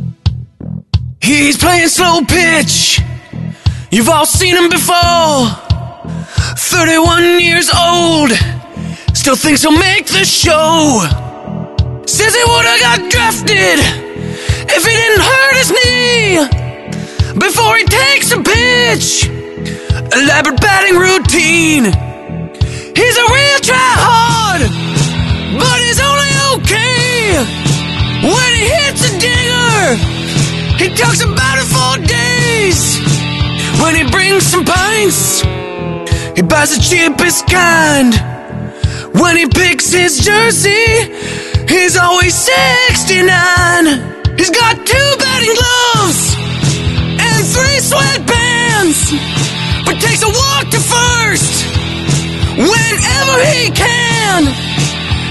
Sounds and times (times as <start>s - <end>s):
Music: 0.0s - 55.3s
Speech: 1.2s - 3.1s, 3.9s - 5.6s, 6.5s - 8.6s, 9.2s - 11.2s, 12.1s - 14.0s, 14.7s - 16.6s, 17.4s - 19.3s, 20.0s - 22.0s, 23.0s - 24.7s, 25.5s - 27.5s, 28.2s - 30.0s, 30.8s - 33.0s, 33.7s - 35.4s, 36.4s - 38.3s, 39.2s - 41.1s, 41.7s - 46.4s, 47.2s - 49.2s, 49.8s - 51.7s, 52.6s - 54.6s.